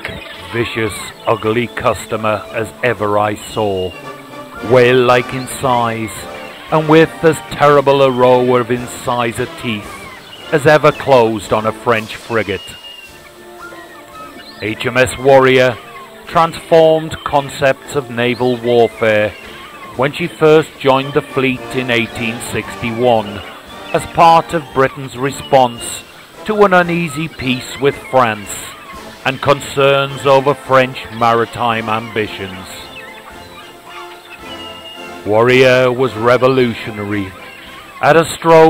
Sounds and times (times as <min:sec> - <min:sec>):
Speech: 0:00.0 - 0:04.0, 0:04.6 - 0:12.8, 0:14.6 - 0:32.9, 0:35.2 - 0:37.4, 0:38.0 - 0:38.6.